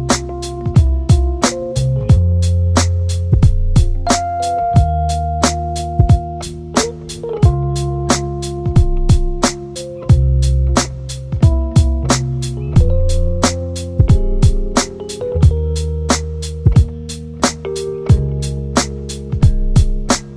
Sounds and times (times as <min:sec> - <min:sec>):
Music: 0:00.0 - 0:20.3.